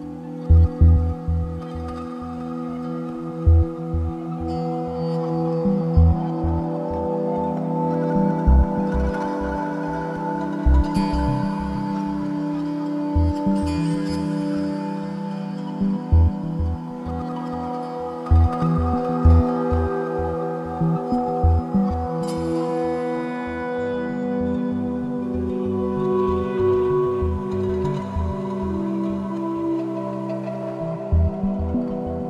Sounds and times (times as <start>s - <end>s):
Ambient music: 0.0s - 32.2s.